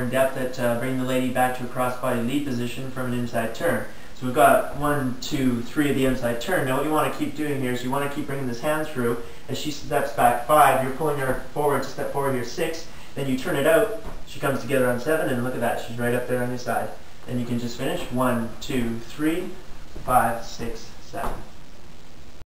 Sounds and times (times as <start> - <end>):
Speech: 0.0 - 21.5.